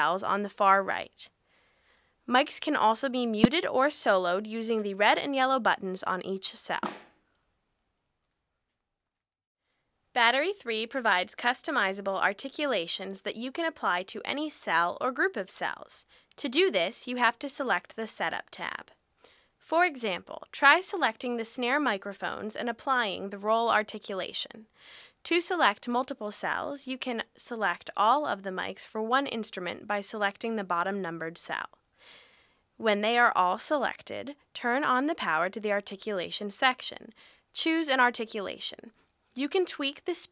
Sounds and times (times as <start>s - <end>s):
Speech: 0.0s - 1.4s, 2.3s - 6.9s, 10.1s - 19.0s, 19.6s - 31.8s, 32.8s - 40.3s.